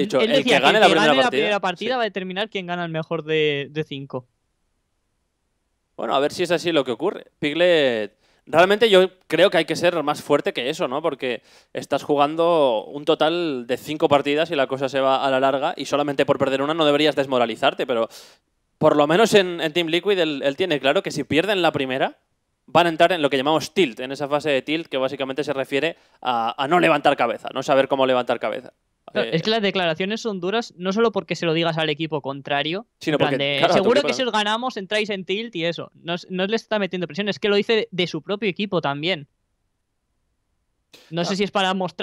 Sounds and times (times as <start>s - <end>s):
Speech: 0.0s - 4.3s, 6.0s - 18.1s, 18.8s - 39.3s, 41.0s - 42.0s.